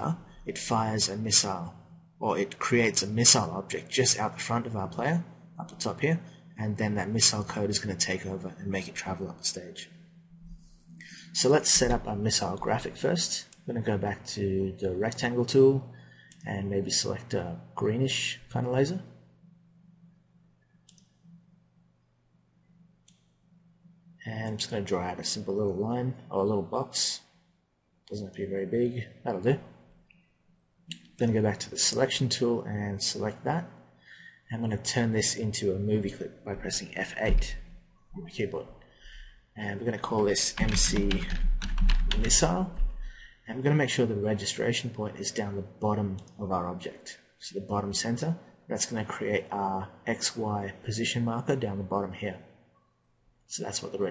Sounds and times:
Speech: 0.0 - 9.9, 11.0 - 19.2, 24.2 - 27.3, 28.1 - 29.8, 30.9 - 33.8, 34.5 - 38.8, 39.6 - 52.5, 53.5 - 54.1.

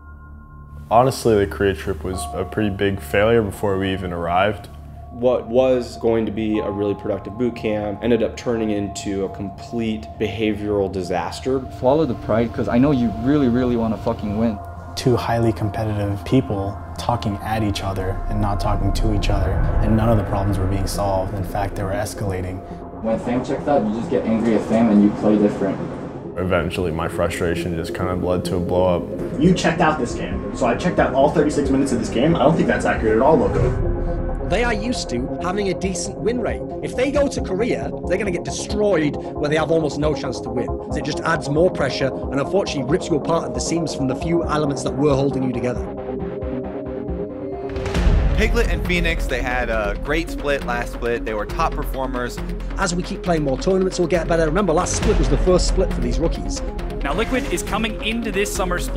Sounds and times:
Music: 0.0 - 58.9
Speech: 0.9 - 25.8, 26.4 - 33.8, 34.4 - 45.9, 48.3 - 58.9.

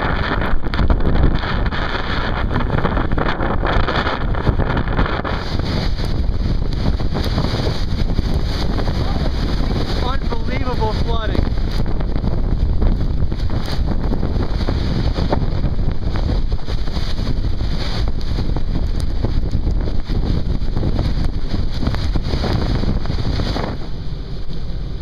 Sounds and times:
Speech: 10.0 - 11.5.

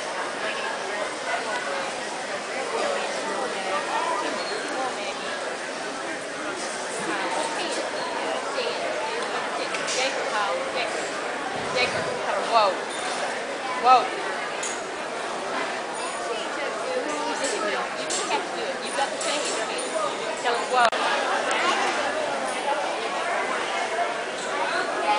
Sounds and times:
Speech: 0.0 - 25.1.

